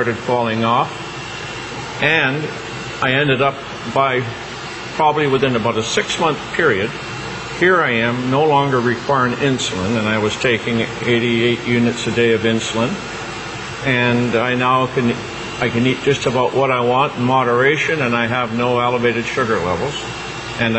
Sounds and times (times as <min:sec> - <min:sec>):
Speech: 0:00.0 - 0:01.0, 0:02.0 - 0:04.4, 0:05.0 - 0:07.0, 0:07.6 - 0:13.1, 0:13.8 - 0:20.7.